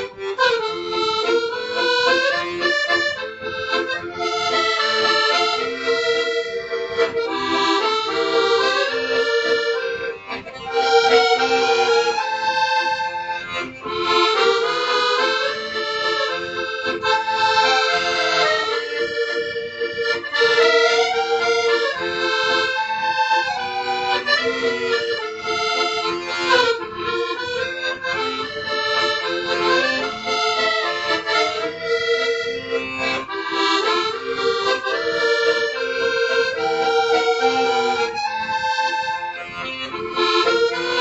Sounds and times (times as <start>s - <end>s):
Accordion: 0.0s - 41.0s.